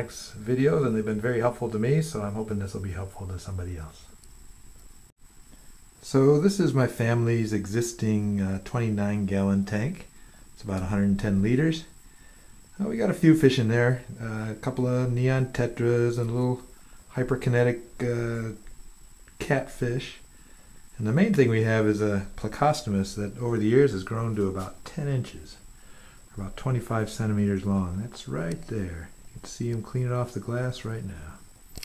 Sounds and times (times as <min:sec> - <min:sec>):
Speech: 0:00.0 - 0:04.2, 0:06.0 - 0:12.0, 0:12.8 - 0:18.7, 0:19.4 - 0:20.3, 0:20.9 - 0:25.7, 0:26.3 - 0:31.5.